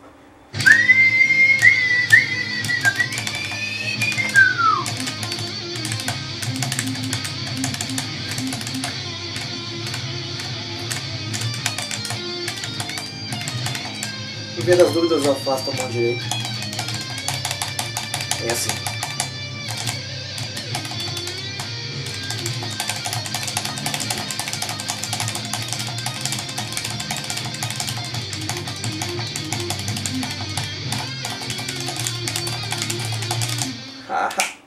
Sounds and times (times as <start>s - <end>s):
Music: 0.5s - 34.1s.